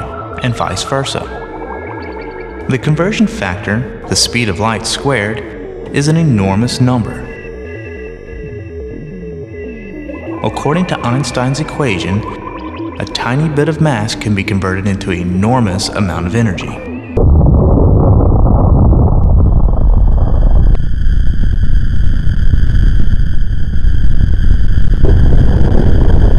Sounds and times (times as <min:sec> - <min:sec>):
Speech: 0:00.0 - 0:01.4, 0:02.7 - 0:07.4, 0:10.4 - 0:12.4, 0:13.0 - 0:16.9.